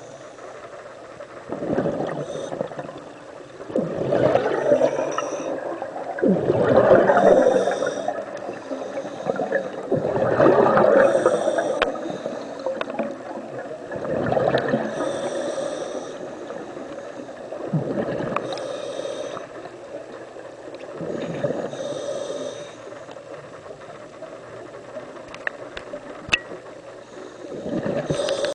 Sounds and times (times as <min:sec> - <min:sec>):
Hiss: 0:11.0 - 0:12.8, 0:14.8 - 0:17.4, 0:18.4 - 0:19.6, 0:21.6 - 0:23.0, 0:27.1 - 0:28.5.